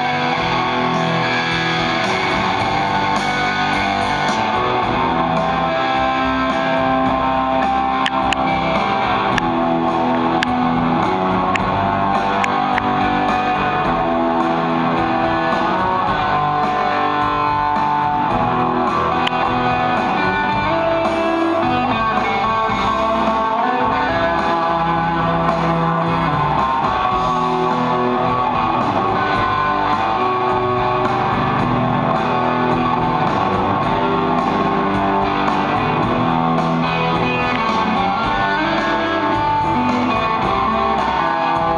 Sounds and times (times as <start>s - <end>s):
Music: 0.0s - 41.7s.